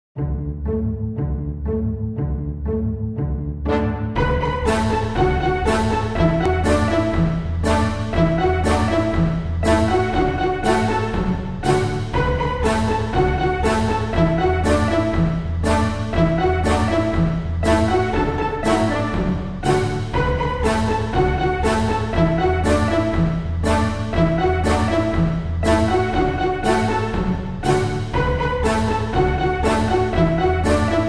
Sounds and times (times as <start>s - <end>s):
Music: 0.2s - 31.0s.